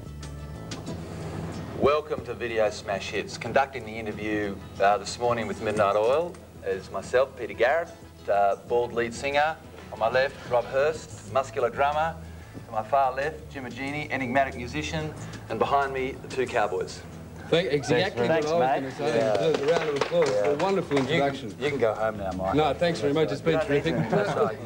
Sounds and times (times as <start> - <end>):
Music: 0.0 - 24.6
Speech: 1.8 - 17.0, 17.6 - 24.6.